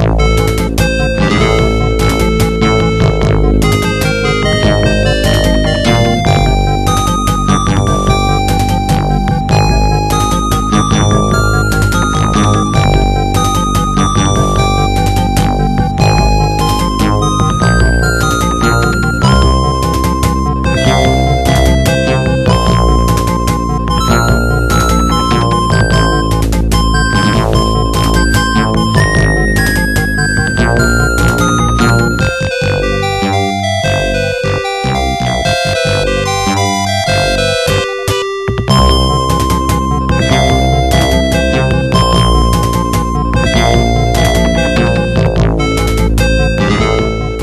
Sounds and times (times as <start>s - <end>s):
Video game music: 0.0s - 47.4s.